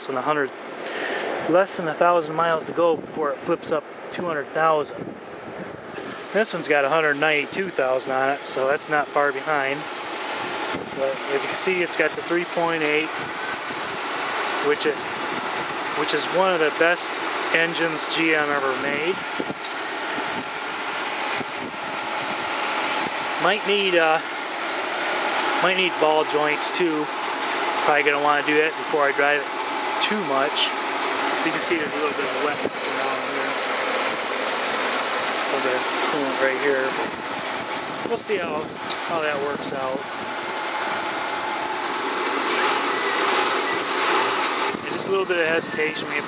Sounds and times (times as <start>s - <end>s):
Speech: 0.0s - 0.5s, 1.5s - 5.0s, 6.4s - 9.9s, 11.0s - 13.2s, 14.6s - 15.0s, 16.0s - 19.2s, 23.4s - 24.2s, 25.6s - 27.1s, 27.8s - 30.8s, 31.4s - 33.6s, 35.5s - 37.2s, 38.0s - 40.1s, 44.8s - 46.2s
Car: 0.0s - 46.2s
Outside, rural or natural: 0.0s - 46.2s.